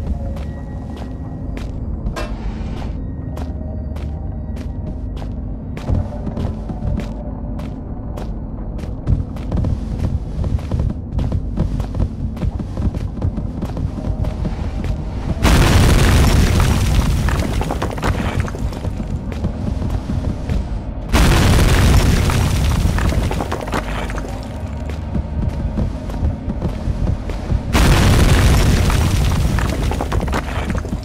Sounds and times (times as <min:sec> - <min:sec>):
Outside, rural or natural: 0:00.0 - 0:31.0.